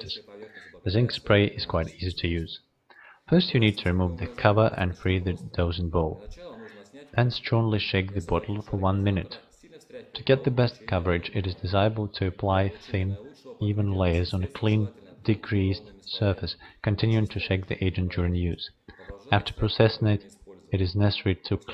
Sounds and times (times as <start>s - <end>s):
Speech: 0.0s - 21.7s.